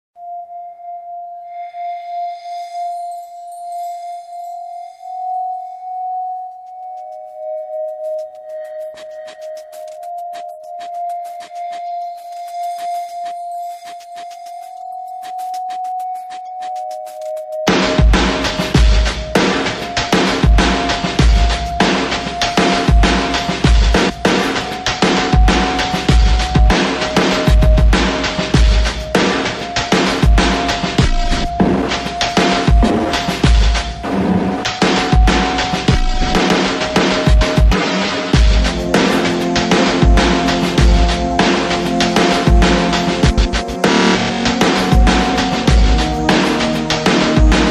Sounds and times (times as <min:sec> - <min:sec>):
Singing bowl: 0:00.2 - 0:33.6.